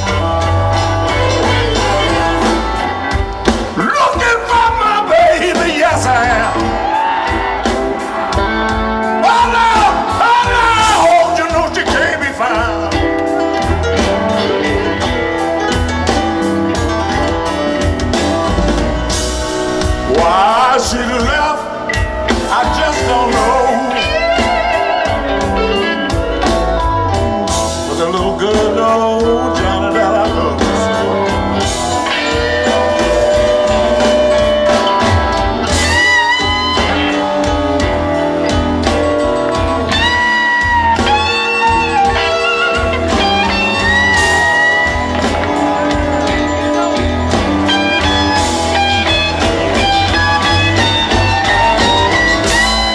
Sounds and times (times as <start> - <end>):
Music: 0.0 - 52.9.